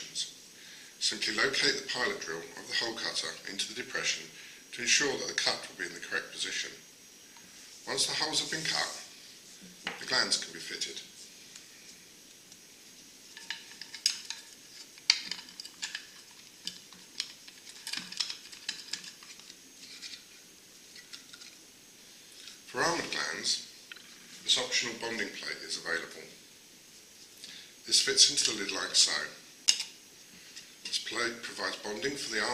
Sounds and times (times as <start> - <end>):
Speech: 0.0 - 0.4, 1.0 - 6.8, 7.9 - 9.1, 9.9 - 11.1, 22.7 - 23.7, 24.4 - 26.4, 27.8 - 29.4, 30.9 - 32.5.